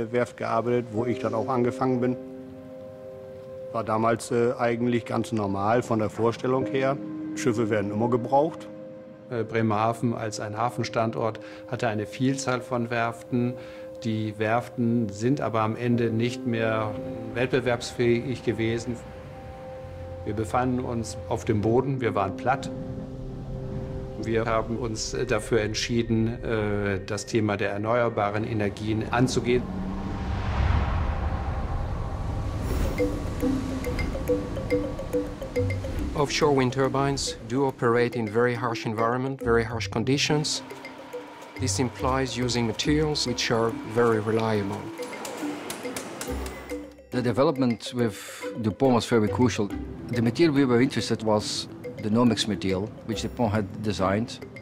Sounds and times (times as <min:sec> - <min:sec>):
Speech: 0:00.0 - 0:02.2, 0:03.7 - 0:08.7, 0:09.3 - 0:19.0, 0:20.3 - 0:22.7, 0:24.2 - 0:29.6, 0:36.2 - 0:40.6, 0:41.6 - 0:44.9, 0:47.1 - 0:54.4
Music: 0:00.0 - 0:31.1, 0:32.2 - 0:54.6
Rustling leaves: 0:28.4 - 0:37.0.